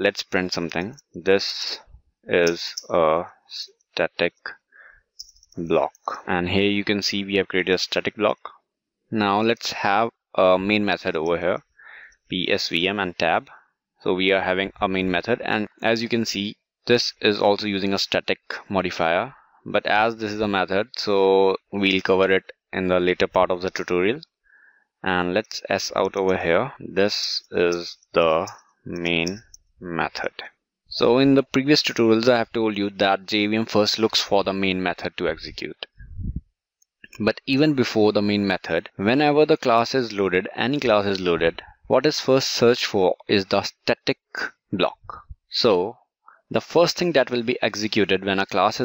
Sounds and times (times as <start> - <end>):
Speech: 0.0 - 4.7, 5.6 - 8.5, 9.2 - 11.7, 12.3 - 24.2, 25.1 - 36.0, 37.1 - 48.8.